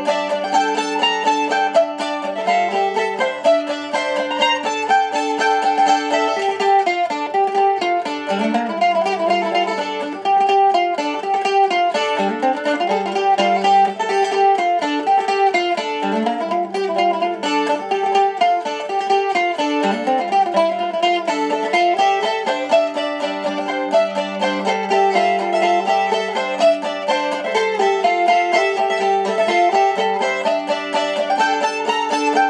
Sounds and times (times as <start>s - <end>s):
Mandolin: 0.0s - 32.4s.